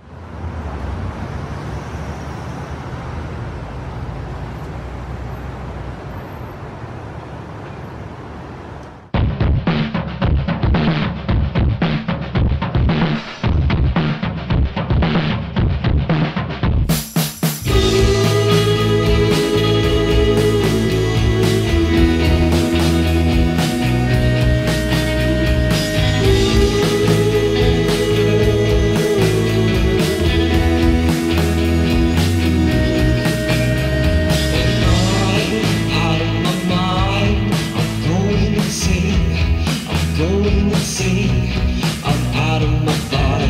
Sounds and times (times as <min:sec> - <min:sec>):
Music: 0:09.2 - 0:43.4.